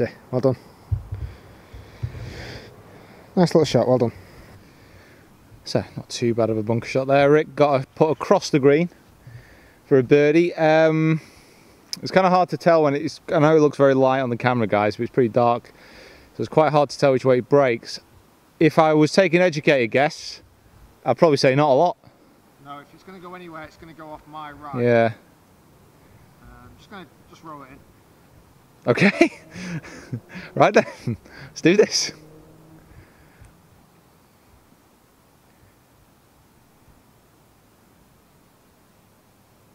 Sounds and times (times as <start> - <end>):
Speech: 0.0 - 0.6, 3.4 - 4.2, 5.6 - 8.9, 9.9 - 11.2, 12.0 - 15.7, 16.4 - 18.0, 18.6 - 20.4, 21.0 - 22.0, 22.6 - 25.2, 30.6 - 32.2
Outside, urban or manmade: 0.0 - 39.7.